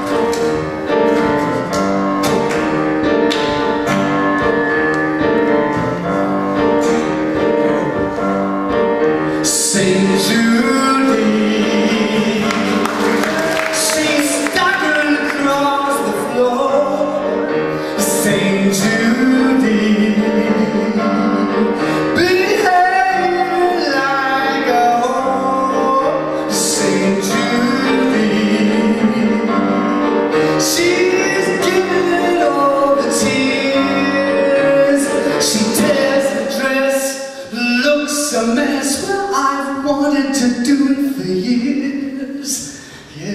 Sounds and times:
Music: 0:00.0 - 0:43.3.

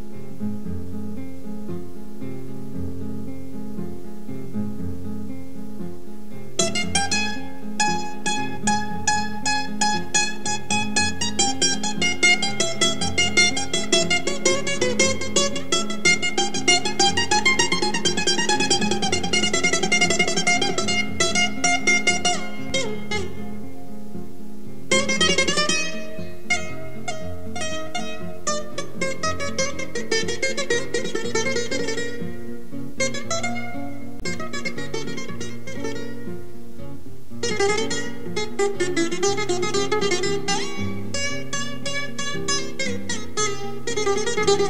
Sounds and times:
Music: 0:00.0 - 0:44.7.

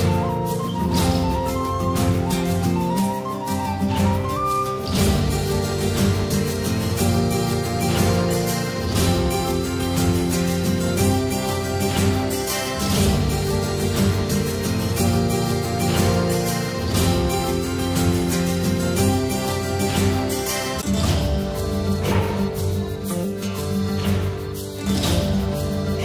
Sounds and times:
Guitar: 0:00.0 - 0:26.0.

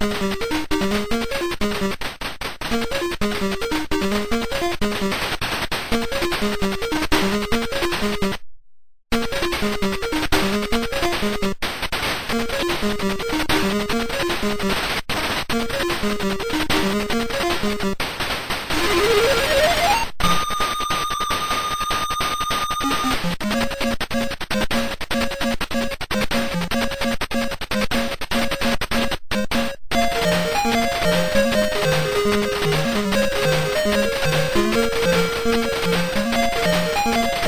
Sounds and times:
Music: 0:00.0 - 0:01.9, 0:12.4 - 0:14.8, 0:15.6 - 0:17.9, 0:30.0 - 0:37.4.

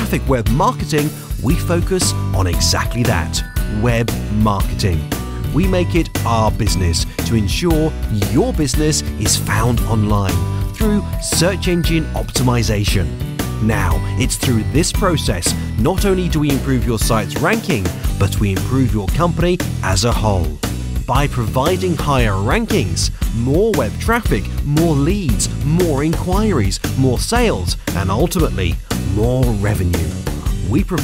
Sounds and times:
Music: 0:00.0 - 0:31.0
Speech: 0:00.0 - 0:31.0.

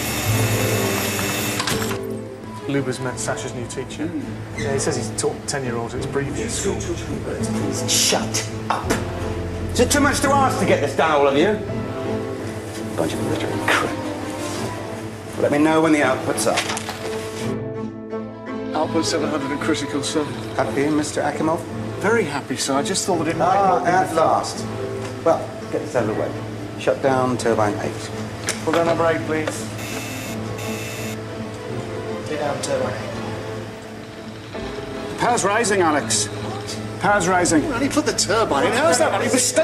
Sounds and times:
Music: 0:00.0 - 0:39.6.

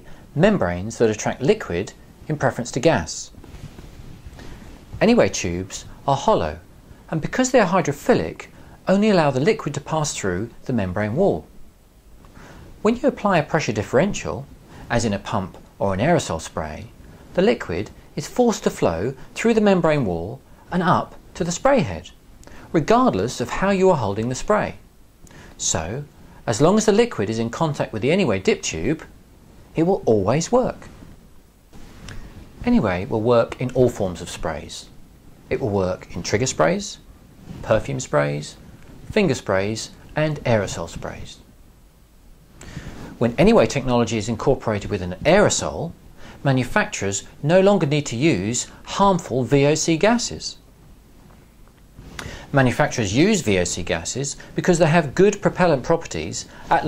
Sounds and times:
Speech: 0:00.0 - 0:03.4, 0:05.0 - 0:11.5, 0:12.8 - 0:24.8, 0:25.6 - 0:30.9, 0:32.6 - 0:41.5, 0:43.2 - 0:50.7, 0:52.5 - 0:56.8.

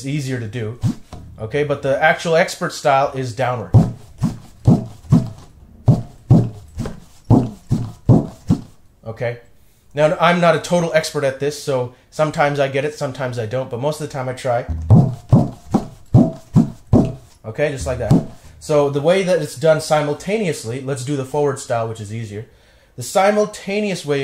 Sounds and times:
Speech: 0:00.0 - 0:03.8, 0:09.0 - 0:15.0, 0:17.5 - 0:24.2.

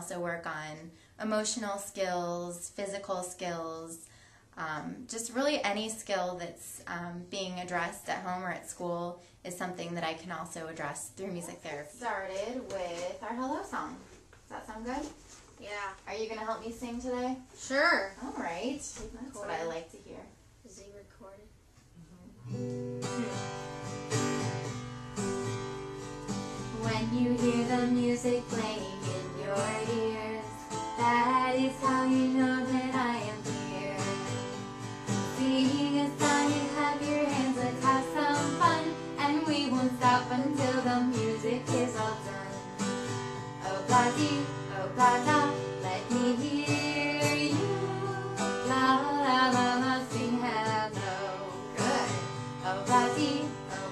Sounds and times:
Speech: 0:04.6 - 0:22.4.

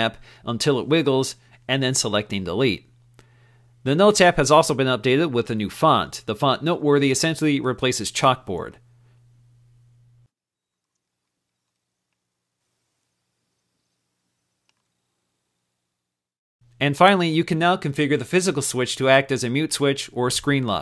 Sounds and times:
Speech: 0:00.0 - 0:02.9, 0:03.9 - 0:08.8, 0:16.8 - 0:20.8.

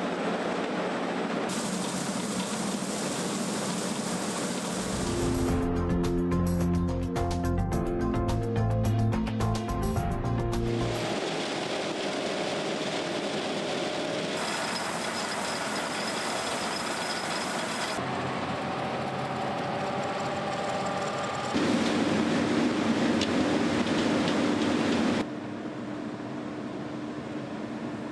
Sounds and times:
Vehicle: 0:14.0 - 0:25.3.

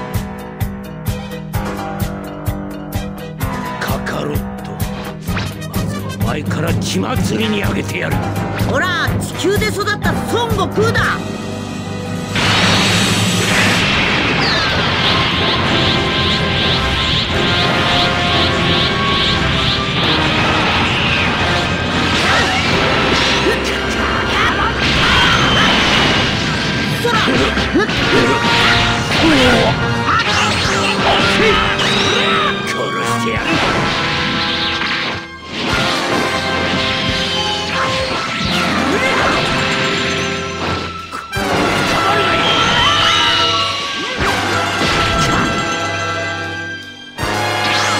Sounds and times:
Music: 0:00.0 - 0:47.9.

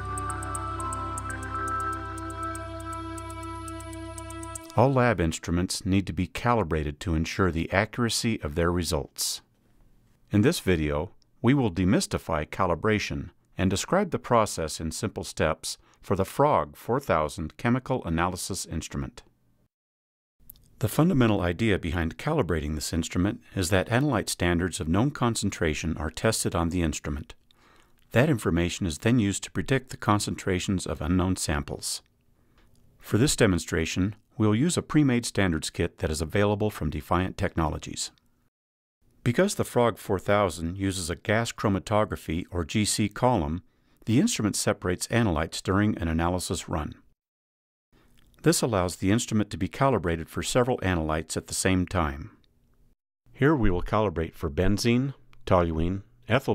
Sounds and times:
Speech: 0:04.7 - 0:09.5, 0:10.3 - 0:19.3, 0:20.8 - 0:27.4, 0:28.1 - 0:32.1, 0:33.0 - 0:38.2, 0:39.3 - 0:47.1, 0:48.4 - 0:52.4, 0:53.4 - 0:56.5.

